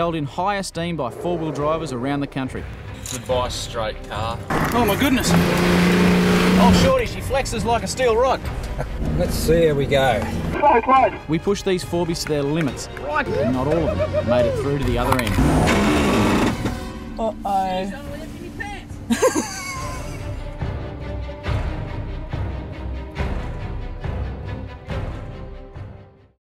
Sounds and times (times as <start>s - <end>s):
Music: 0.0s - 26.4s.